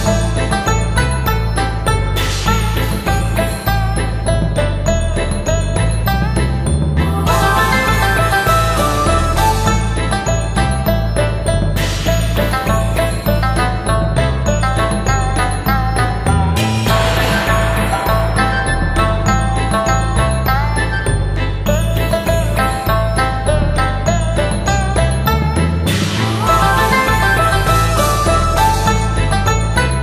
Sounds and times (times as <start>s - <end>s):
Jingle, tinkle: 0.0s - 30.0s.